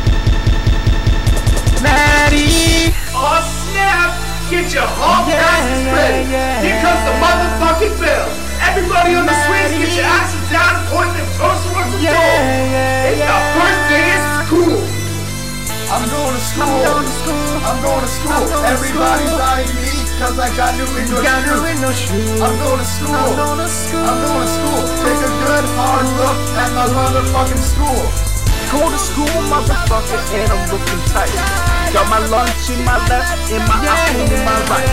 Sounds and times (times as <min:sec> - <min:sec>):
Music: 0:00.0 - 0:34.9
Speech: 0:01.9 - 0:15.0, 0:15.9 - 0:34.9.